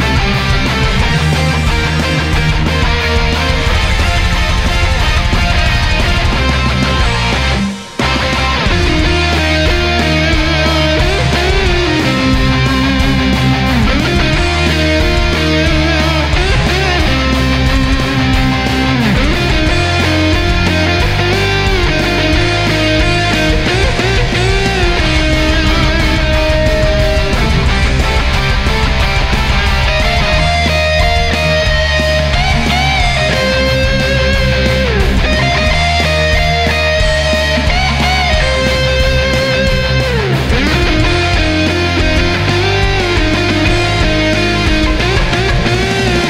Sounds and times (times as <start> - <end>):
Bass guitar: 0.0 - 46.3
Strum: 0.0 - 46.3.